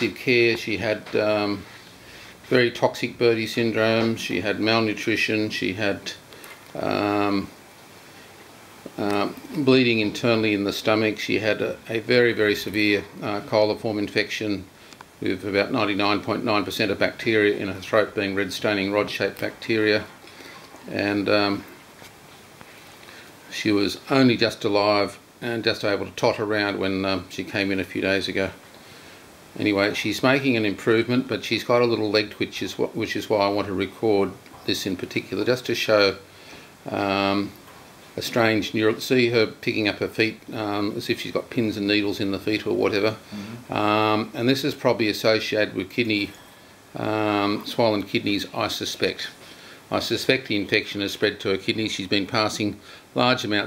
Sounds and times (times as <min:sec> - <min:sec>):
Speech: 0:00.0 - 0:01.7, 0:02.5 - 0:07.6, 0:09.0 - 0:20.1, 0:20.8 - 0:21.7, 0:23.5 - 0:28.6, 0:29.6 - 0:37.6, 0:38.2 - 0:46.4, 0:47.0 - 0:53.6.